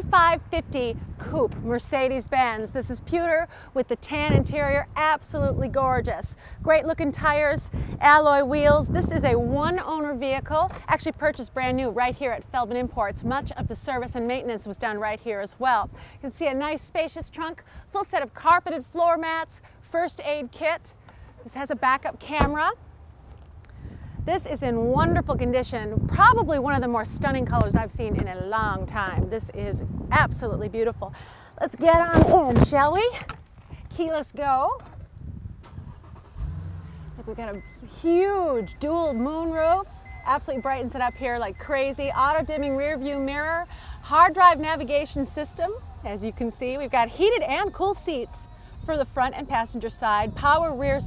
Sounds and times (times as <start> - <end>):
Speech: 0.0 - 22.8, 24.3 - 33.2, 33.9 - 34.8, 37.2 - 51.0.